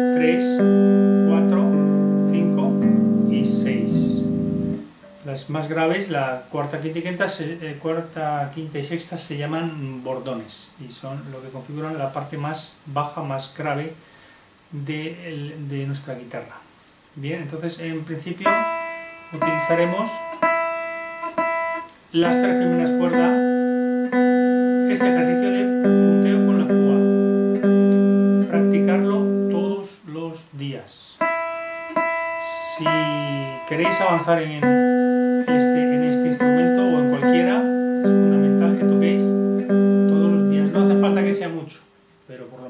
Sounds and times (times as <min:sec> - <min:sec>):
Electric guitar: 0:00.0 - 0:05.3, 0:18.5 - 0:29.6, 0:31.2 - 0:41.3
Speech: 0:00.1 - 0:00.6, 0:01.3 - 0:04.3, 0:05.2 - 0:14.0, 0:14.7 - 0:18.7, 0:19.3 - 0:20.2, 0:22.2 - 0:23.4, 0:24.9 - 0:27.1, 0:28.5 - 0:31.2, 0:32.4 - 0:34.8, 0:35.5 - 0:39.4, 0:40.1 - 0:42.6.